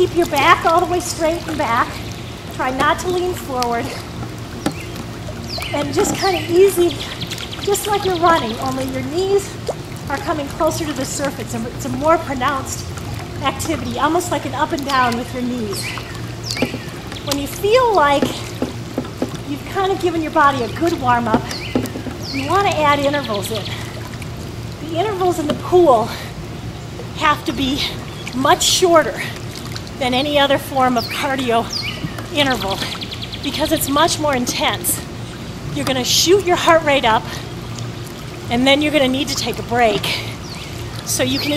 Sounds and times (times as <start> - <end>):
Speech: 0.0 - 2.0, 2.6 - 4.0, 5.8 - 7.1, 7.7 - 12.8, 13.4 - 15.9, 17.3 - 18.4, 19.5 - 21.6, 22.3 - 23.8, 24.8 - 26.3, 27.2 - 29.3, 30.0 - 35.0, 35.8 - 37.4, 38.5 - 40.3, 41.1 - 41.5
Stream: 0.0 - 41.5.